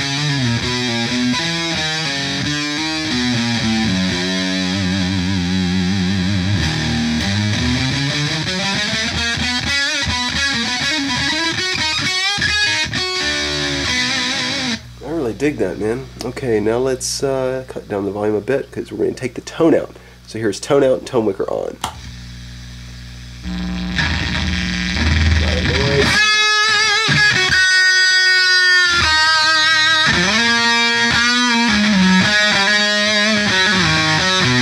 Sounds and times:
Effects unit: 0.0s - 15.0s, 21.8s - 34.6s
Guitar: 0.0s - 34.6s
Speech: 15.0s - 21.9s, 25.4s - 26.1s.

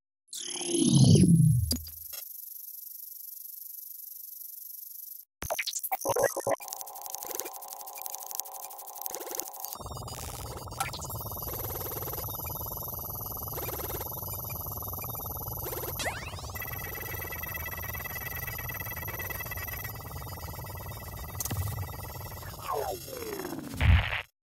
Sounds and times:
Sound effect: 0.3s - 2.3s, 5.4s - 24.3s.

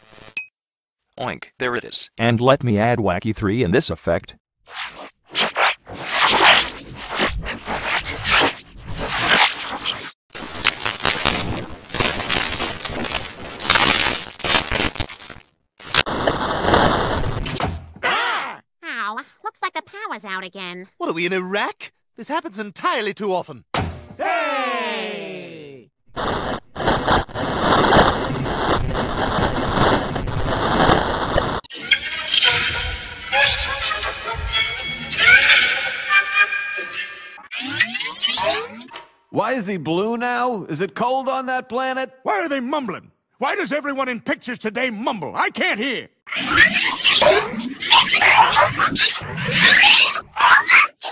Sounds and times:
Speech: 1.2s - 4.4s, 18.8s - 23.6s, 24.2s - 25.9s, 39.4s - 46.1s.

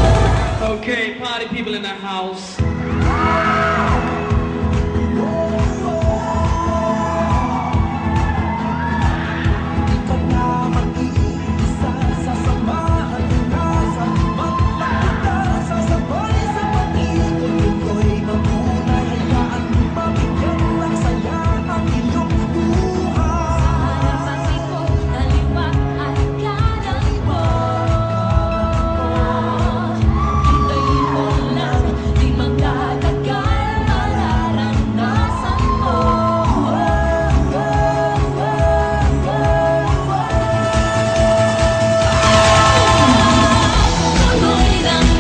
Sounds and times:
Techno: 0.0s - 45.2s.

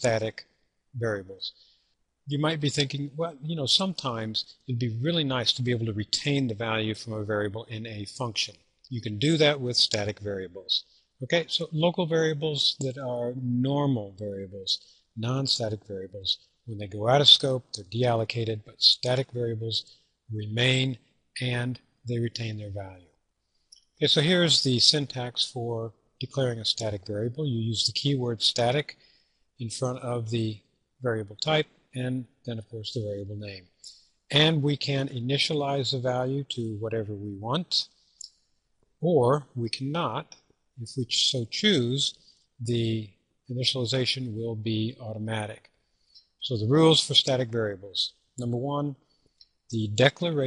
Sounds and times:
Speech: 0.0s - 1.6s, 2.3s - 23.0s, 24.0s - 29.0s, 29.6s - 37.9s, 39.0s - 45.6s, 46.4s - 49.0s, 49.7s - 50.4s.

